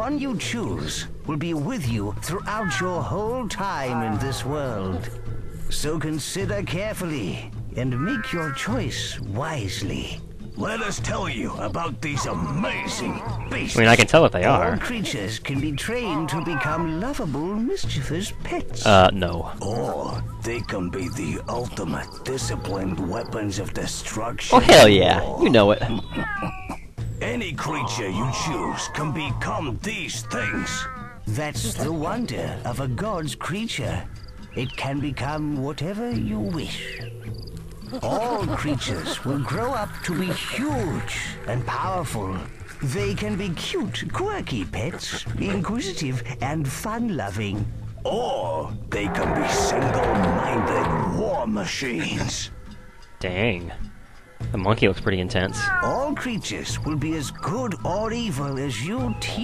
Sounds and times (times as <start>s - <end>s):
Speech: 0.0s - 26.3s, 27.2s - 37.1s, 38.0s - 52.5s, 53.2s - 53.9s, 54.5s - 59.4s.